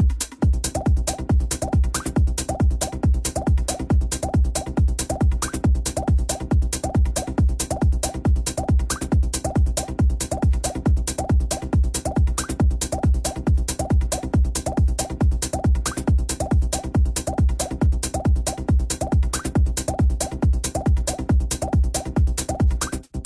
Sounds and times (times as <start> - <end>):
Techno: 0.0 - 23.2.